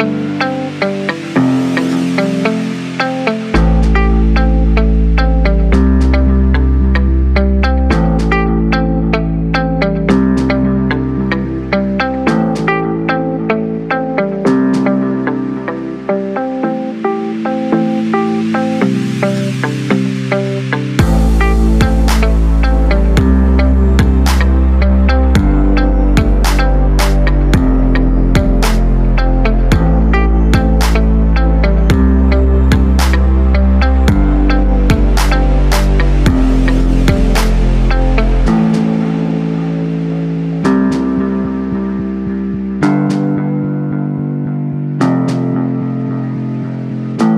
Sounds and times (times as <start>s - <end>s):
Music: 0.0s - 47.3s.